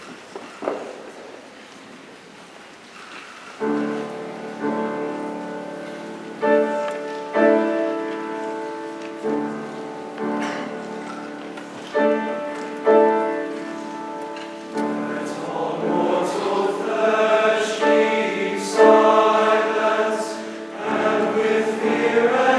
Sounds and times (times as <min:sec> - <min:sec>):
Choir: 0:14.7 - 0:22.5.